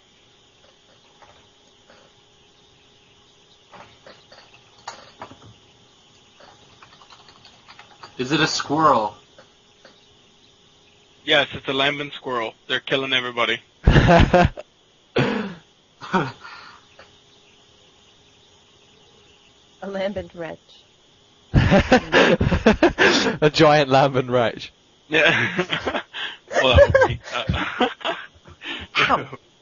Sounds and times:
Speech: 11.3 - 13.6, 19.8 - 20.8, 23.4 - 25.4, 26.5 - 27.7, 29.0 - 29.4.

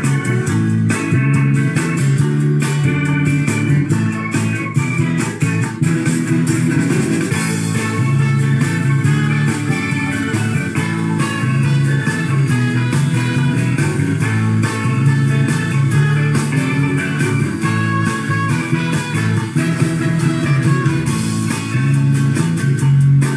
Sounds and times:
Music: 0.0 - 23.3.

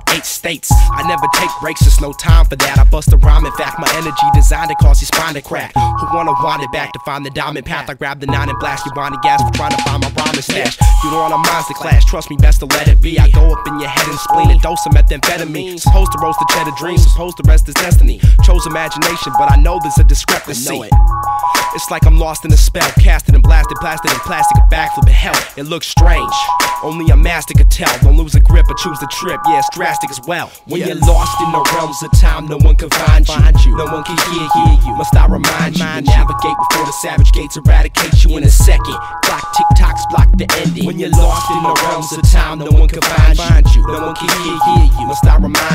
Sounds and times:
Soundtrack music: 18.5 - 22.9.

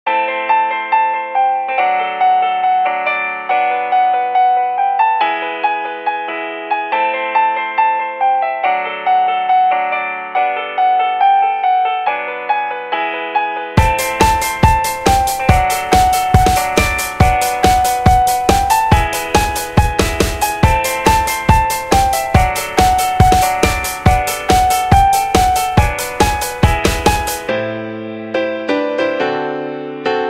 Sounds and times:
Music: 0.1 - 30.2.

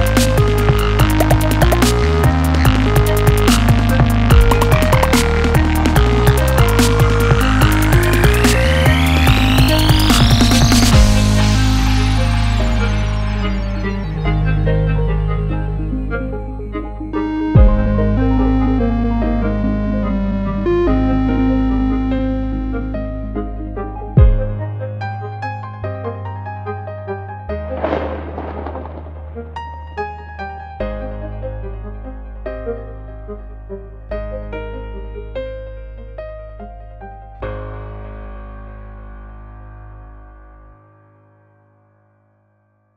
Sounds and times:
Electric piano: 0.0 - 40.7.

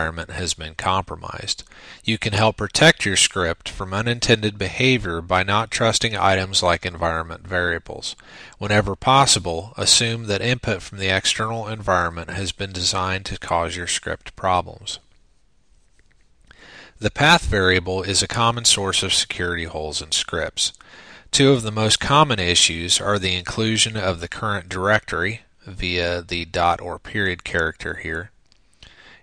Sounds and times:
Speech: 0.0 - 15.1, 17.0 - 28.4.

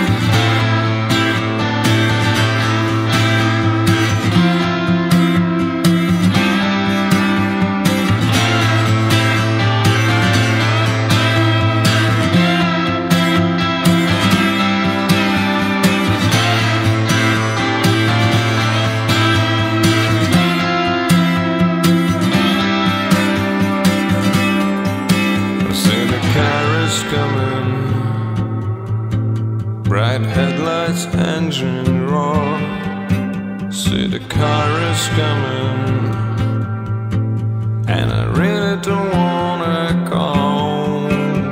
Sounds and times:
Music: 0.0 - 41.5.

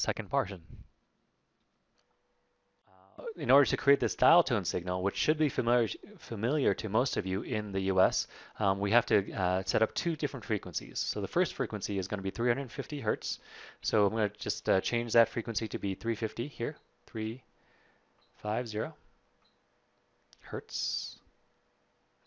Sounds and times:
Speech: 0.0 - 0.9, 3.0 - 17.5, 18.4 - 19.0, 20.4 - 21.3.

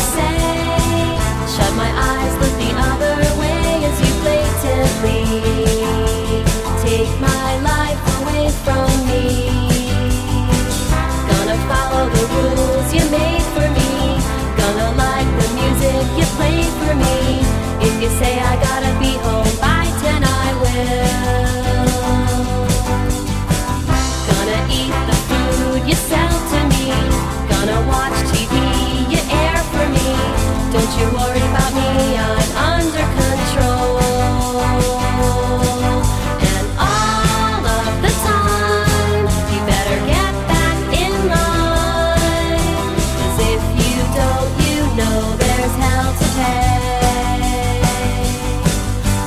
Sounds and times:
Jingle (music): 0.0 - 49.2.

